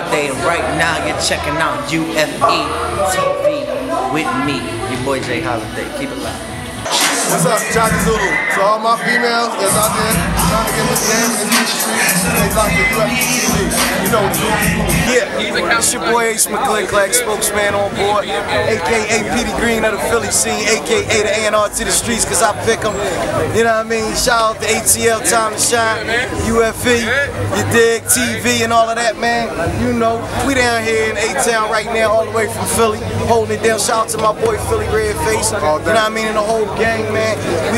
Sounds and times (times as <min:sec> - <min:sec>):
Speech: 0:00.0 - 0:10.8, 0:13.8 - 0:37.7.